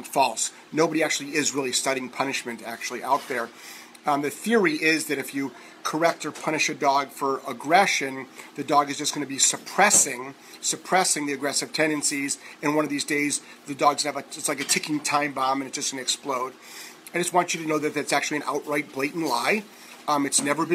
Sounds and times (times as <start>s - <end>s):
Speech: 0.0s - 20.7s.